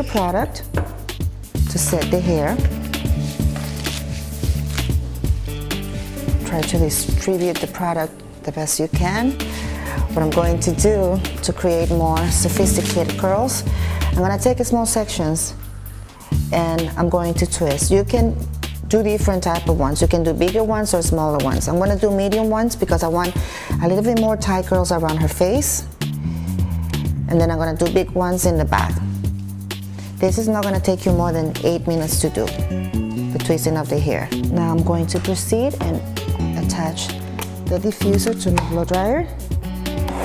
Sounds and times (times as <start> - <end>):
Female speech, woman speaking: 0.0 - 0.6, 1.7 - 2.7, 6.4 - 9.4, 10.1 - 13.6, 14.2 - 15.6, 16.5 - 25.9, 27.3 - 29.0, 30.2 - 32.6, 33.3 - 39.4
Music: 0.0 - 40.2.